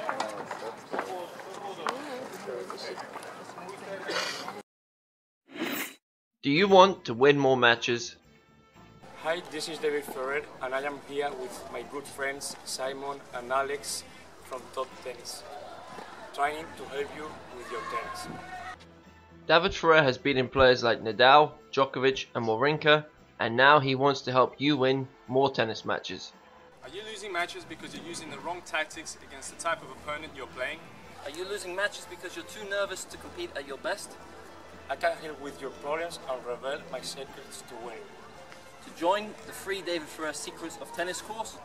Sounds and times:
Music: 0:00.0 - 0:04.6, 0:06.4 - 0:41.6
Speech: 0:00.0 - 0:04.6, 0:06.4 - 0:08.2, 0:09.2 - 0:15.5, 0:16.3 - 0:18.4, 0:19.5 - 0:34.1, 0:34.9 - 0:38.0, 0:38.9 - 0:41.6.

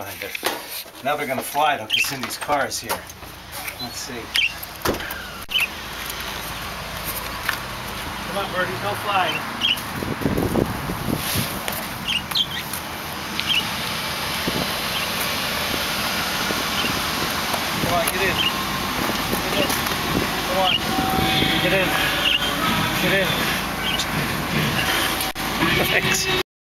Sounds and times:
Speech: 0:00.0 - 0:00.4, 0:01.0 - 0:03.0, 0:03.8 - 0:04.4, 0:08.3 - 0:09.4, 0:17.8 - 0:18.5, 0:20.5 - 0:20.9, 0:21.6 - 0:22.0, 0:23.0 - 0:23.4
Music: 0:21.4 - 0:26.4.

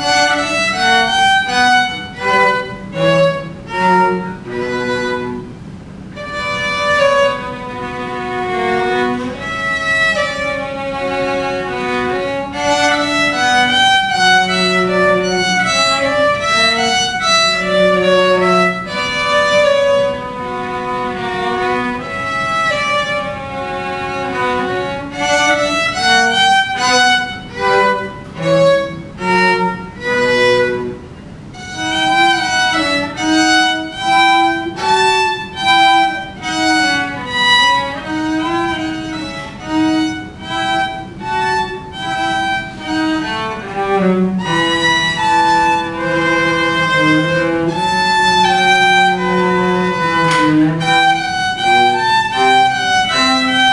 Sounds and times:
Violin, fiddle: 0:00.0 - 0:53.7.

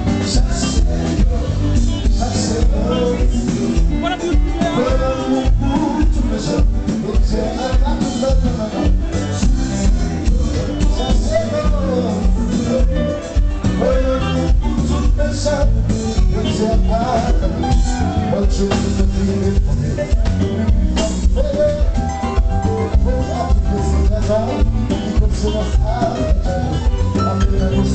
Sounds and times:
Music: 0:00.0 - 0:27.9.

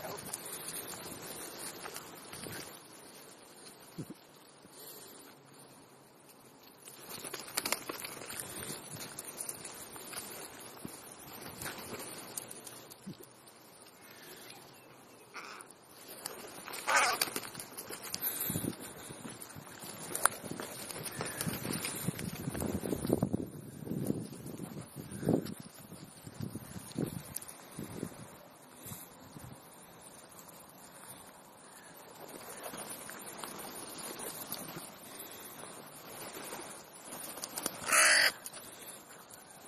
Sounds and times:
Caw: 0:15.3 - 0:15.8, 0:16.8 - 0:17.4, 0:21.1 - 0:21.6, 0:37.8 - 0:39.0.

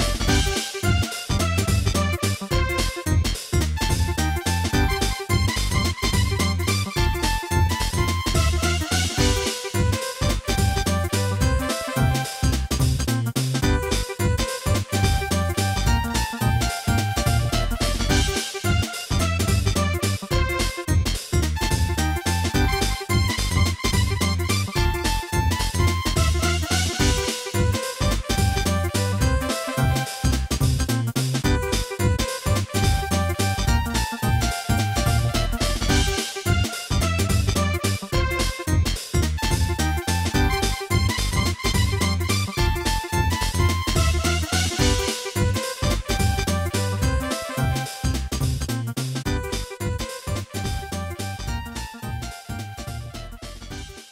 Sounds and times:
Video game music: 0:00.0 - 0:54.1.

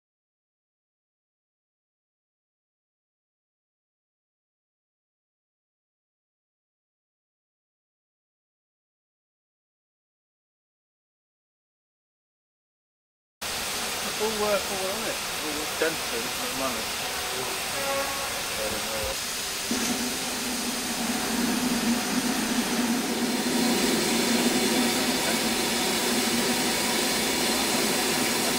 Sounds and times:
Hiss: 0:13.4 - 0:28.5.

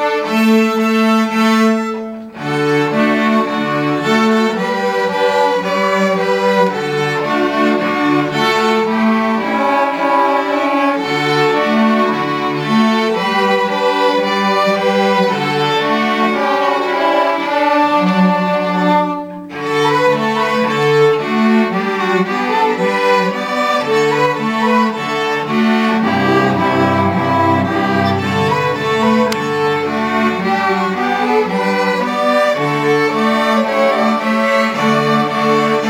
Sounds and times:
Music: 0:00.0 - 0:35.8.

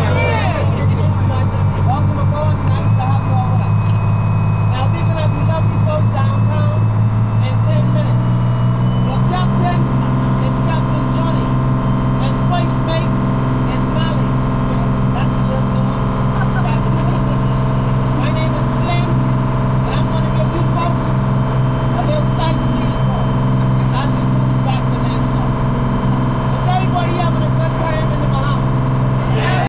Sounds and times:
Speech: 0:00.0 - 0:04.0, 0:04.7 - 0:06.8, 0:07.4 - 0:08.3, 0:09.1 - 0:11.6, 0:12.2 - 0:17.6, 0:18.2 - 0:19.2, 0:19.9 - 0:21.1, 0:21.9 - 0:25.6, 0:26.6 - 0:28.7
Motorboat, speedboat: 0:00.0 - 0:29.6.

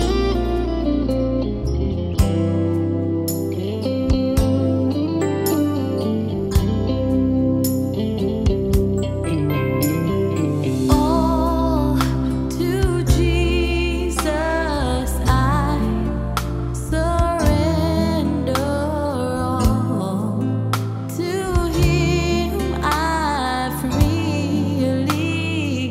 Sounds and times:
Jazz: 0:00.0 - 0:25.9
Rhythm and blues: 0:00.0 - 0:25.9.

